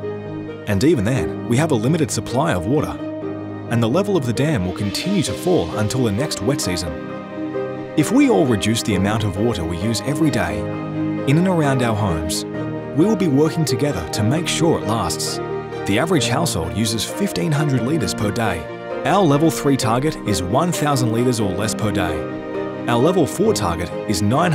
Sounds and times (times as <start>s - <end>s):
Music: 0.0s - 24.5s
Speech: 0.7s - 3.0s, 3.7s - 7.0s, 8.0s - 10.7s, 11.3s - 12.4s, 13.0s - 22.3s, 22.9s - 24.5s.